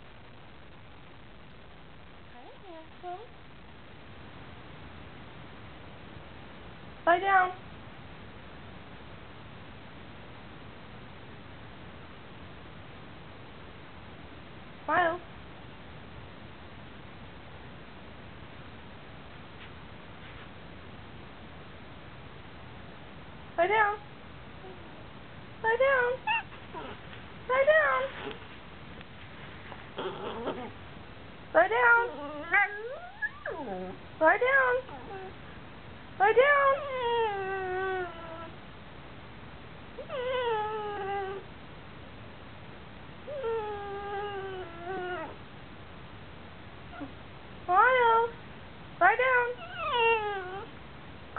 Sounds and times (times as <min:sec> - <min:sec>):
Speech: 0:02.3 - 0:03.3, 0:07.0 - 0:07.6, 0:14.9 - 0:15.3, 0:23.6 - 0:24.1, 0:25.6 - 0:26.2, 0:27.5 - 0:28.2, 0:31.5 - 0:32.8, 0:34.2 - 0:35.2, 0:36.2 - 0:36.9, 0:47.7 - 0:48.4, 0:49.0 - 0:49.6
Domestic animals, pets: 0:25.8 - 0:28.5, 0:29.6 - 0:30.8, 0:31.6 - 0:35.4, 0:36.4 - 0:38.6, 0:40.0 - 0:41.5, 0:43.3 - 0:45.4, 0:46.9 - 0:48.4, 0:49.0 - 0:50.8.